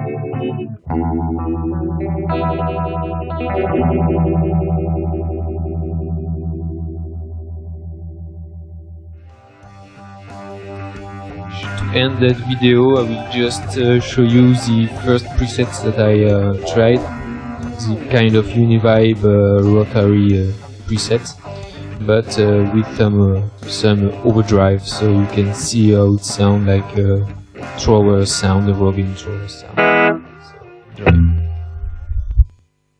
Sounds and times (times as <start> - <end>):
Guitar: 0.0 - 32.6
Distortion: 0.0 - 32.9
Effects unit: 0.0 - 32.9
Speech: 11.5 - 17.1, 17.8 - 21.4, 22.0 - 29.8.